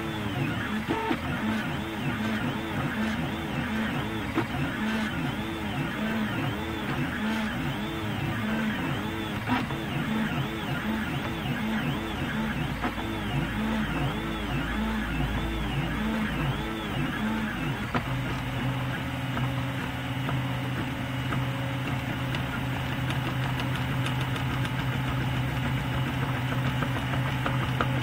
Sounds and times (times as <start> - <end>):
Printer: 0.0 - 28.0.